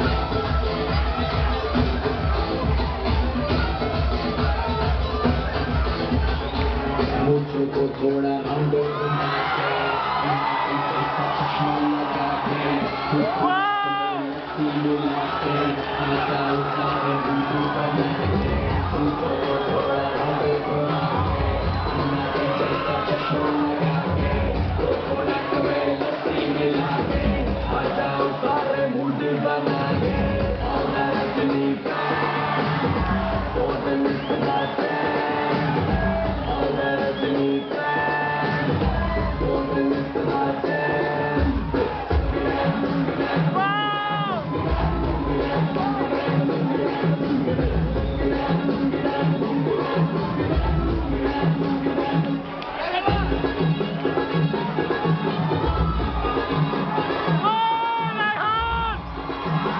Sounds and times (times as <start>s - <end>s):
Crowd: 0.0s - 59.7s.